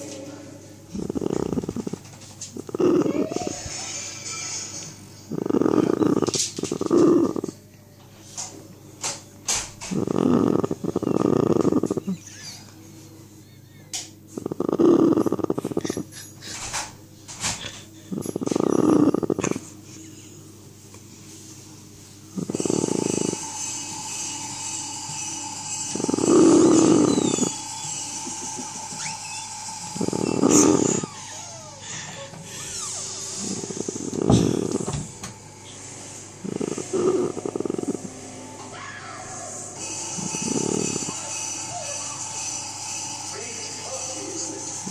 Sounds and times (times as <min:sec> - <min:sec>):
Snoring: 0:00.9 - 0:03.6, 0:05.3 - 0:07.6, 0:09.8 - 0:12.2, 0:14.4 - 0:16.1, 0:18.1 - 0:19.6, 0:22.4 - 0:23.8, 0:24.5 - 0:31.5, 0:32.5 - 0:35.1, 0:36.4 - 0:38.1, 0:40.1 - 0:41.4.